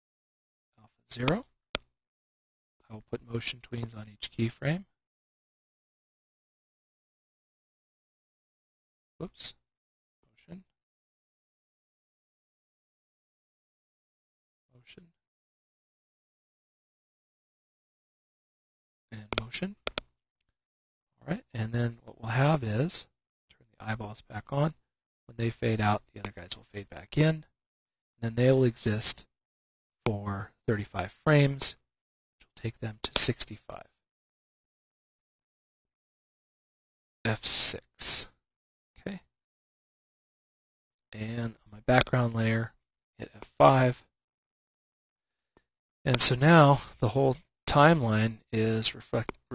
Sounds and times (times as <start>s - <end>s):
Speech: 0.8s - 1.5s, 2.8s - 5.0s, 9.2s - 9.6s, 10.4s - 10.7s, 14.8s - 15.2s, 19.1s - 19.8s, 21.2s - 27.5s, 28.2s - 29.3s, 30.1s - 31.8s, 32.4s - 34.0s, 37.3s - 38.4s, 39.0s - 39.3s, 41.2s - 44.1s, 46.1s - 49.5s.